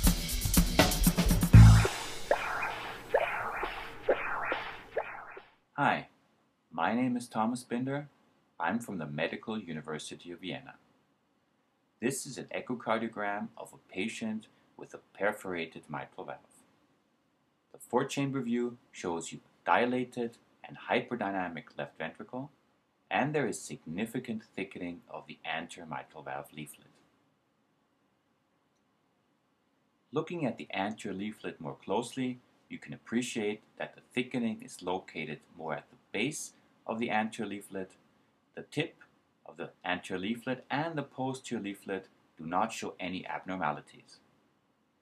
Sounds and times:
Speech: 0:05.8 - 0:10.8, 0:12.0 - 0:16.6, 0:17.8 - 0:27.0, 0:30.1 - 0:38.0, 0:38.6 - 0:44.2.

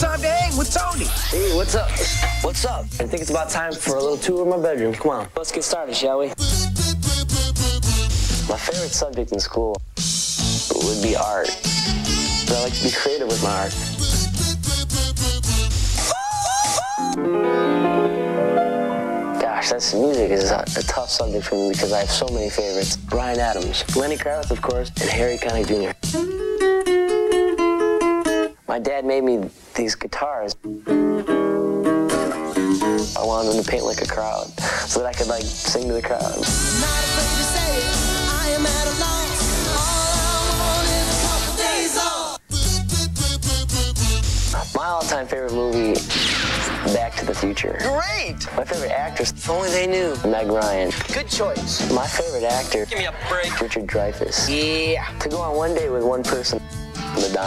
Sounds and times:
Speech: 0:00.0 - 0:06.4, 0:08.5 - 0:09.8, 0:10.6 - 0:11.6, 0:12.5 - 0:13.8, 0:19.4 - 0:26.0, 0:28.7 - 0:30.6, 0:33.0 - 0:36.4, 0:44.6 - 0:46.1, 0:46.8 - 0:57.4
Music: 0:00.0 - 0:28.7, 0:30.5 - 0:57.4.

